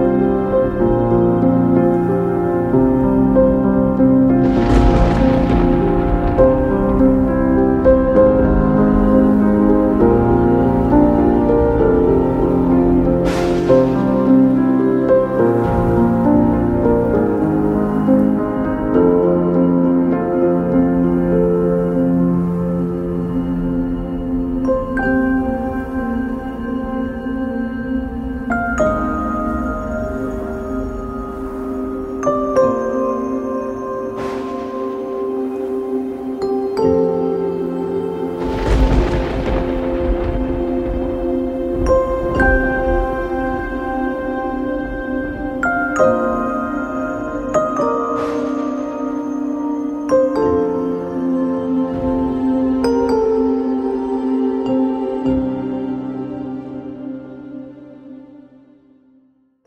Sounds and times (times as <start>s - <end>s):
New-age music: 0.0s - 59.4s.